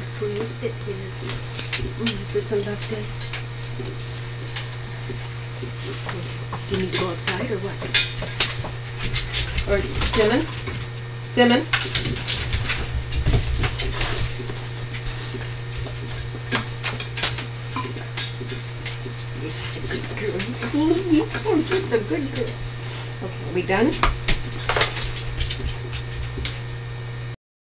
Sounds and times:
Speech: 0.0s - 3.2s, 6.1s - 8.0s, 9.6s - 10.6s, 11.3s - 11.8s, 19.4s - 22.6s, 23.2s - 24.0s.

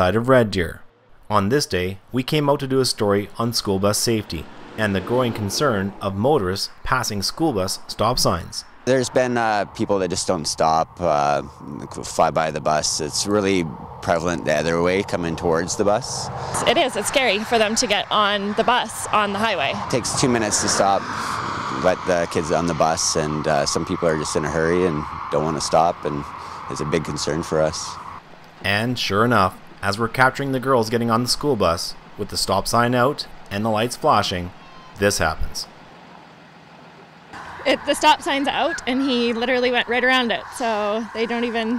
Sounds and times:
Speech: 0.0s - 21.2s, 21.8s - 28.0s, 28.6s - 35.7s, 37.7s - 41.7s
Vehicle: 0.0s - 41.7s.

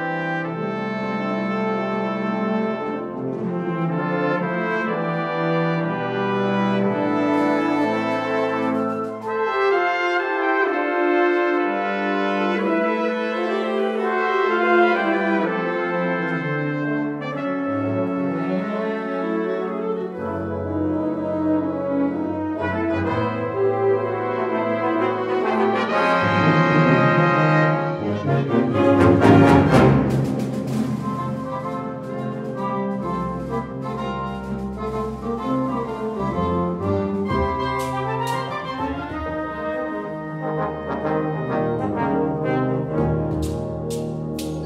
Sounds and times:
Music: 0.0s - 44.6s.

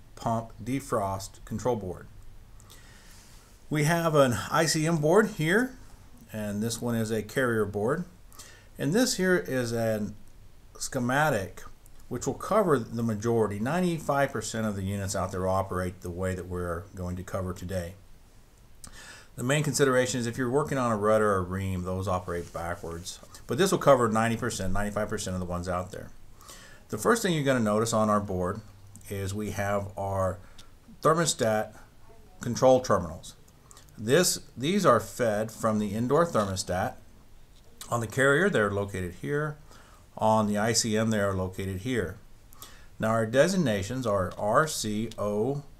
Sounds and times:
Speech: 0.2s - 2.1s, 3.7s - 8.2s, 8.8s - 10.2s, 10.8s - 18.0s, 19.4s - 26.2s, 26.9s - 30.4s, 31.0s - 33.4s, 34.0s - 37.0s, 37.7s - 39.6s, 40.2s - 42.2s, 43.0s - 45.7s.

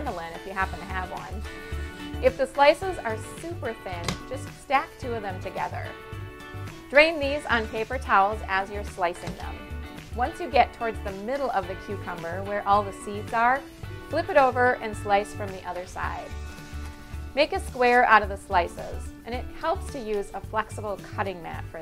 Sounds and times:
Speech: 0.0s - 1.4s, 2.2s - 5.9s, 7.0s - 9.6s, 10.2s - 16.3s, 17.4s - 21.8s
Music: 0.0s - 21.8s.

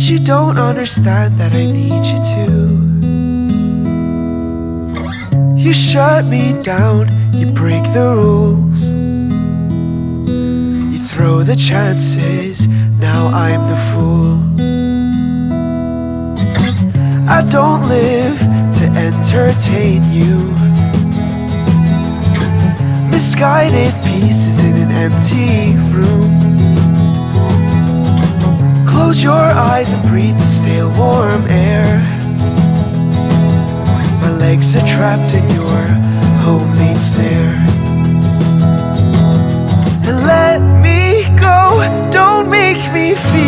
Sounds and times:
Tender music: 16.7s - 43.4s.

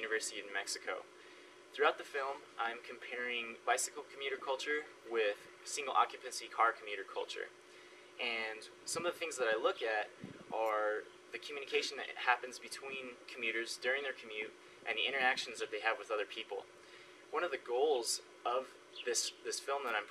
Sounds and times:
Speech: 0.0s - 1.1s, 1.8s - 7.5s, 8.2s - 16.7s, 17.3s - 20.1s.

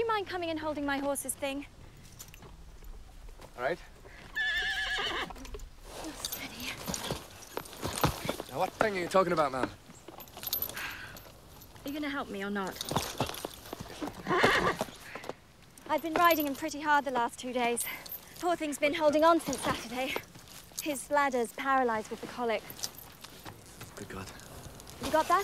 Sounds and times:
Clip-clop: 0.8s - 25.4s
Neigh, whinny: 4.1s - 5.5s, 14.0s - 15.3s.

